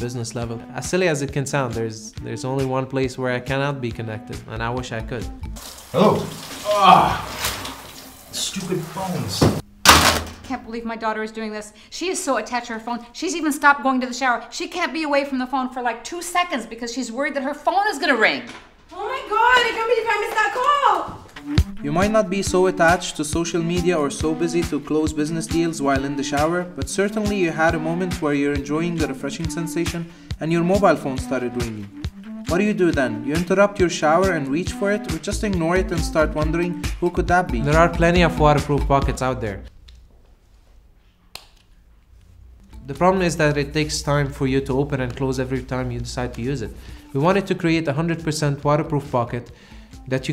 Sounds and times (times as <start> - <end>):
Music: 0.0 - 39.8, 41.8 - 50.3
Speech: 6.0 - 7.2, 8.4 - 9.6, 10.5 - 21.1, 21.8 - 31.9, 32.5 - 39.7, 42.9 - 49.5, 50.1 - 50.3.